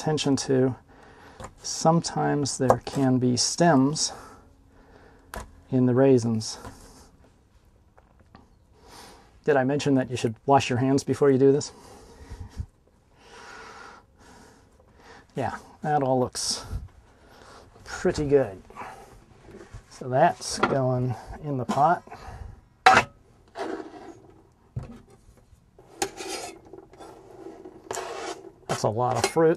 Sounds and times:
Speech: 0.0s - 0.8s, 1.6s - 4.3s, 5.7s - 6.7s, 9.4s - 11.8s, 15.4s - 16.8s, 17.8s - 18.7s, 19.9s - 22.1s, 28.7s - 29.5s.

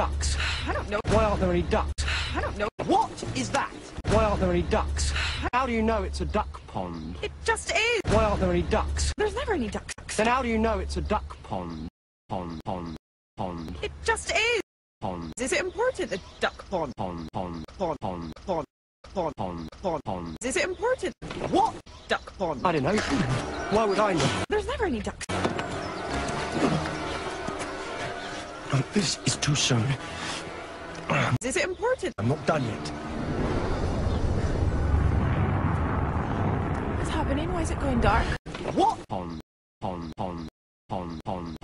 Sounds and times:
Music: 25.3s - 33.5s.

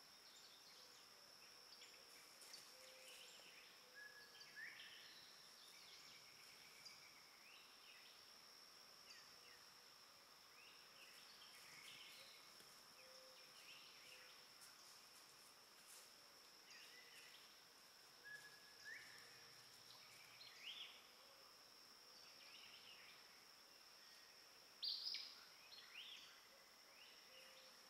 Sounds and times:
Bird: 1.8s - 8.2s.

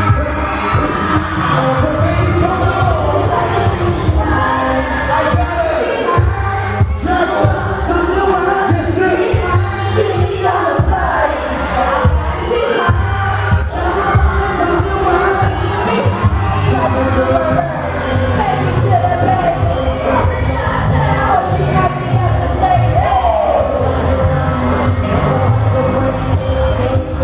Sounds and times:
Inside, large room or hall: 0.0s - 27.2s
Music: 0.0s - 27.2s
Singing: 0.0s - 27.2s.

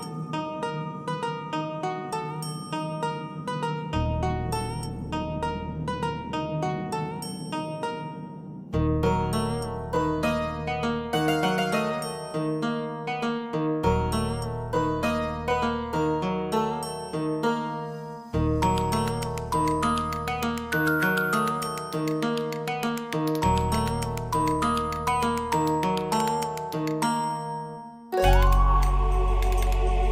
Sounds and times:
New-age music: 0.0s - 30.1s.

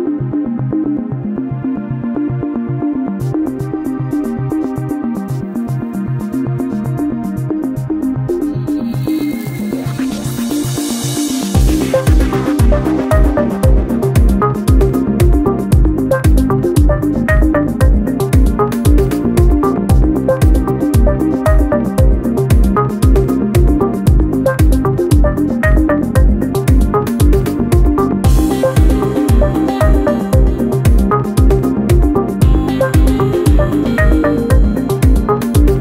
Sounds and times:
Music: 0.0s - 35.8s.

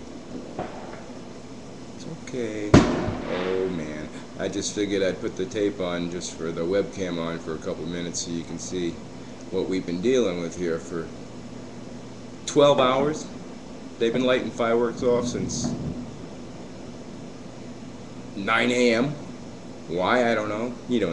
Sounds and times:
Speech: 2.0s - 11.1s, 12.5s - 13.4s, 14.0s - 15.8s, 18.4s - 19.2s, 19.9s - 21.1s.

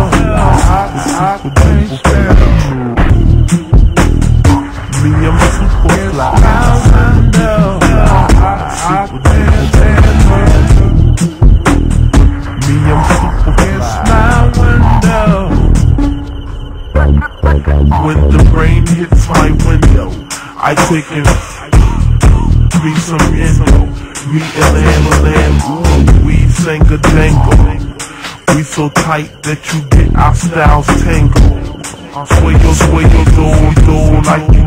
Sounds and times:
Music: 0.0s - 34.6s.

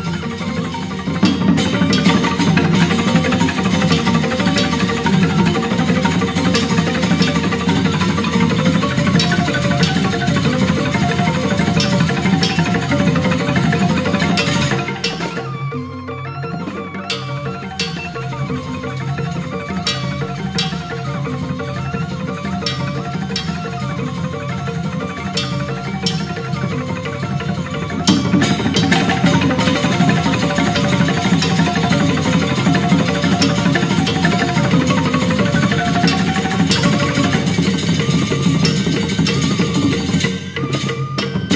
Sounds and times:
Folk music: 0.0s - 41.5s.

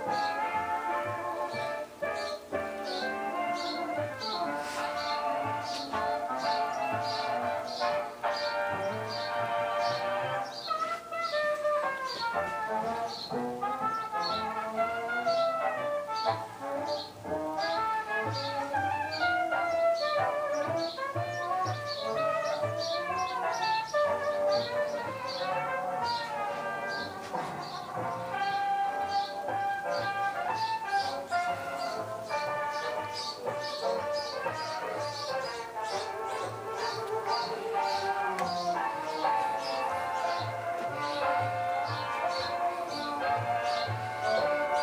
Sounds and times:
Music: 0.0s - 44.8s.

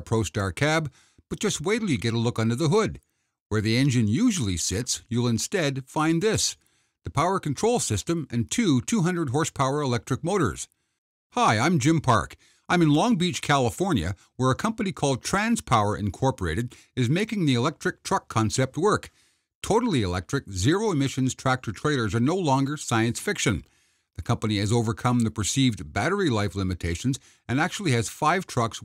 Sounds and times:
Speech: 0.0s - 10.8s, 11.4s - 28.8s.

